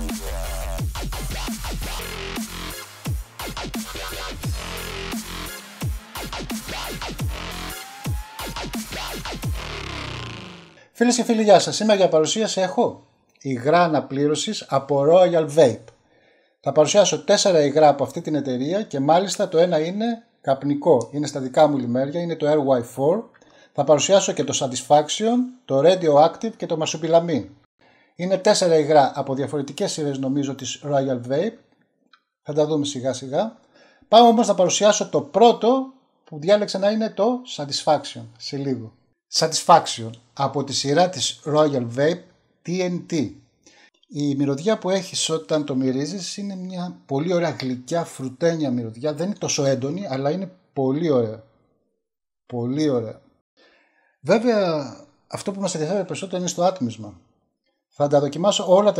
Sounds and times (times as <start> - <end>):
Speech: 11.0 - 15.9, 16.7 - 27.5, 28.2 - 31.6, 32.5 - 43.4, 44.1 - 51.4, 52.5 - 53.2, 54.3 - 57.2, 58.0 - 58.9.